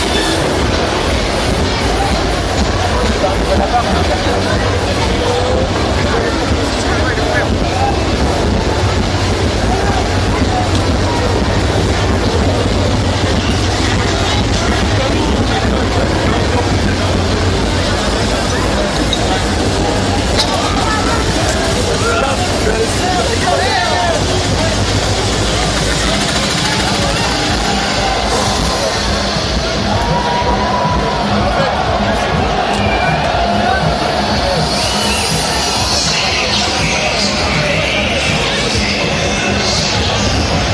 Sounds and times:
Speech: 0:00.0 - 0:40.7
Techno: 0:00.0 - 0:40.7.

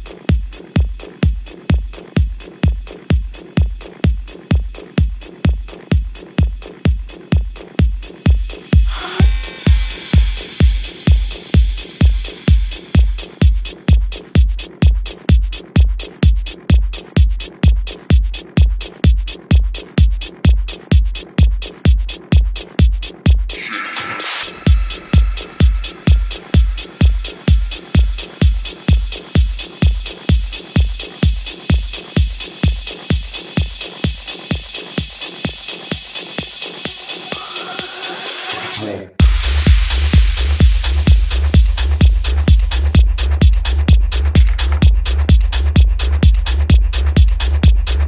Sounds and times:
Drum machine: 0:00.0 - 0:48.0.

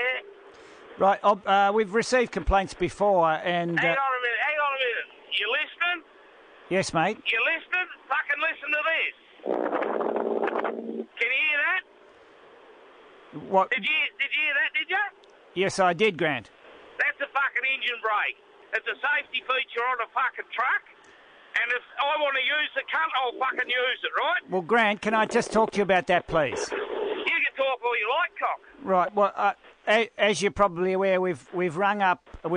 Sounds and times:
Speech: 0:00.0 - 0:00.2, 0:01.0 - 0:06.0, 0:06.7 - 0:09.1, 0:11.1 - 0:11.9, 0:13.4 - 0:20.9, 0:21.6 - 0:26.7, 0:27.3 - 0:32.5.

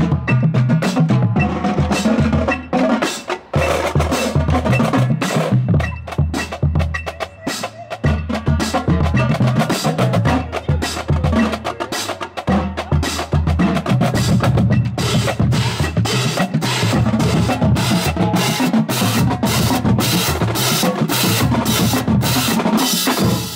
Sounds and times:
Drum kit: 0:00.0 - 0:23.5
Bass drum: 0:08.0 - 0:11.8, 0:12.4 - 0:22.6.

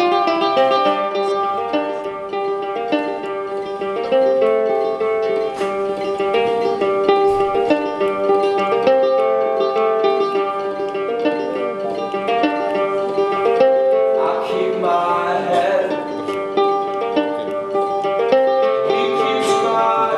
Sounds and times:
Ukulele: 0:00.0 - 0:20.1
Singing: 0:14.2 - 0:16.4, 0:18.8 - 0:20.1.

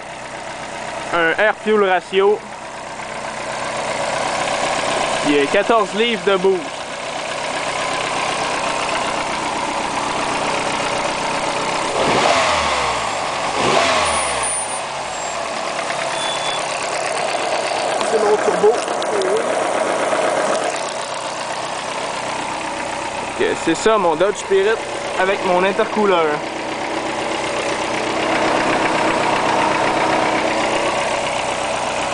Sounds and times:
Car: 0:00.0 - 0:32.1
Heavy engine (low frequency): 0:00.0 - 0:32.1
Idling: 0:00.0 - 0:32.1
Speech: 0:01.1 - 0:02.5, 0:05.2 - 0:06.7, 0:18.0 - 0:19.6, 0:23.4 - 0:26.4.

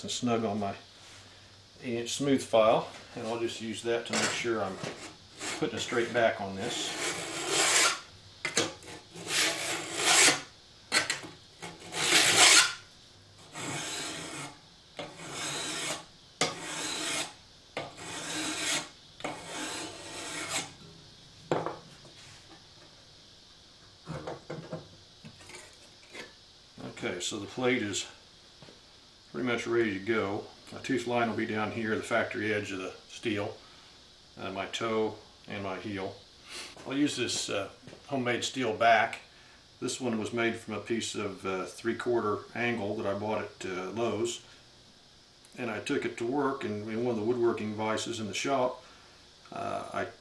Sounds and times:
Filing (rasp): 0:04.2 - 0:05.7, 0:06.6 - 0:08.0, 0:08.8 - 0:10.5, 0:11.6 - 0:12.8, 0:13.4 - 0:20.8.

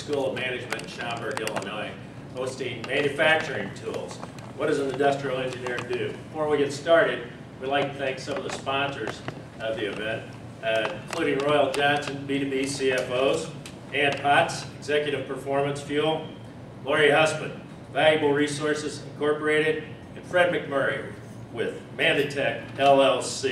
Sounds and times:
Speech: 0:00.0 - 0:23.5.

